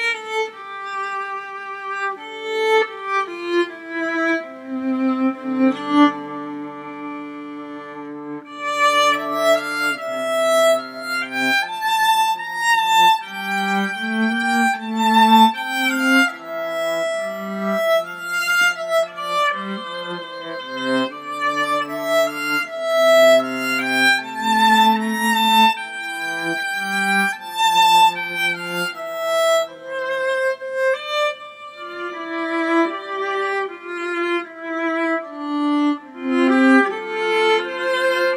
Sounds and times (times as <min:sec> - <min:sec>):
Violin, fiddle: 0:00.0 - 0:38.3.